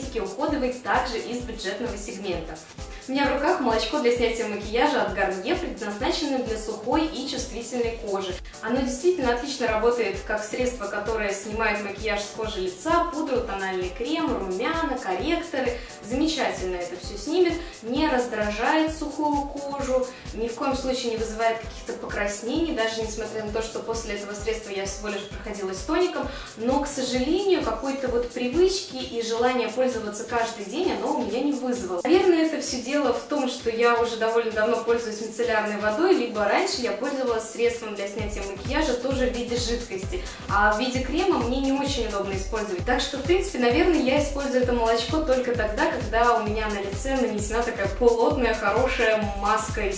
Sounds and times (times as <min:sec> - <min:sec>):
Music: 0:00.0 - 0:49.9
Speech: 0:00.0 - 0:49.9.